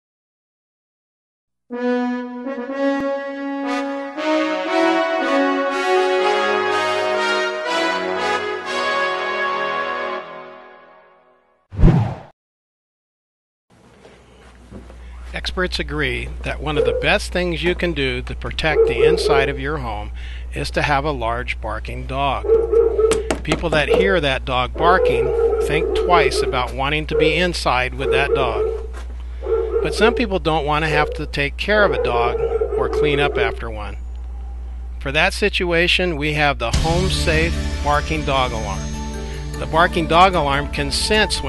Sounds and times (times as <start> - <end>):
Music: 1.7 - 11.6, 36.7 - 41.4
Speech: 15.3 - 22.4, 23.5 - 28.6, 29.8 - 34.0, 35.0 - 38.8, 39.6 - 41.4
Bow-wow: 16.8 - 17.1, 18.7 - 19.6, 22.4 - 23.2, 24.8 - 33.7
Whimper (dog): 18.8 - 19.5, 27.2 - 27.4, 28.0 - 28.9, 30.9 - 33.6.